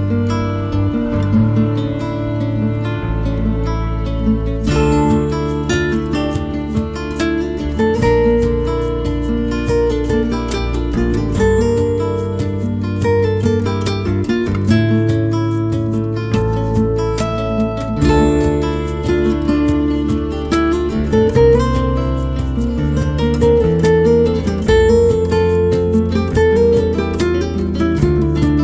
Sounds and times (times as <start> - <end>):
Acoustic guitar: 0.0 - 28.6.